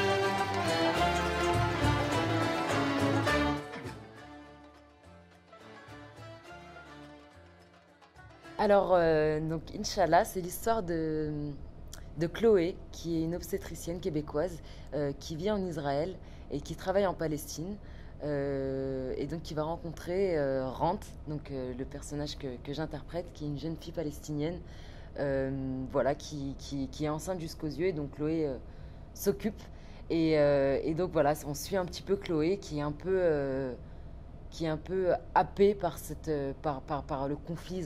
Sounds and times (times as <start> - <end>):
Music: 0.0 - 9.2
Speech: 8.6 - 24.6, 25.2 - 28.6, 29.2 - 33.8, 34.6 - 37.8.